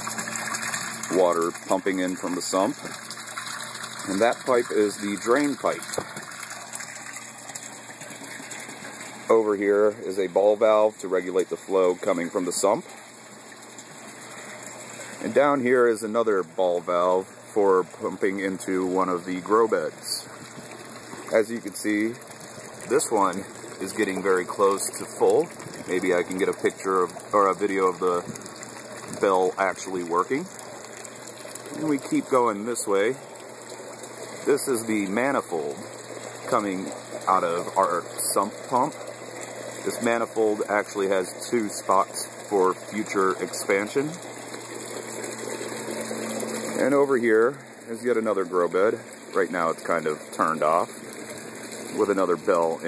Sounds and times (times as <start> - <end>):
Bathtub (filling or washing): 0.0 - 52.8
Water: 0.0 - 52.8.